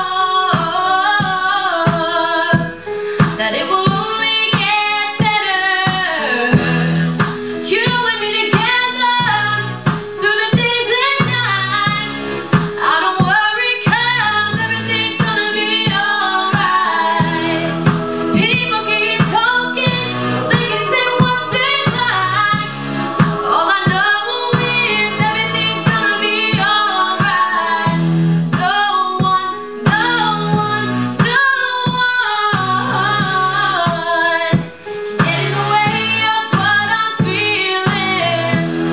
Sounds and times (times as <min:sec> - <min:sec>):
Female singing: 0:00.0 - 0:02.7, 0:03.4 - 0:06.6, 0:07.7 - 0:12.2, 0:12.8 - 0:28.0, 0:28.6 - 0:38.6
Music: 0:00.0 - 0:38.9.